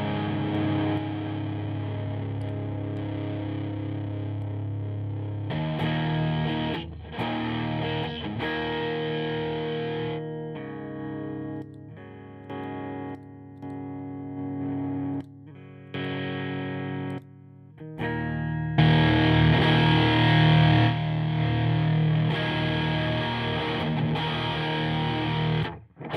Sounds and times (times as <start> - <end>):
Distortion: 0.0 - 26.1
Effects unit: 0.0 - 26.1
Guitar: 0.0 - 26.1.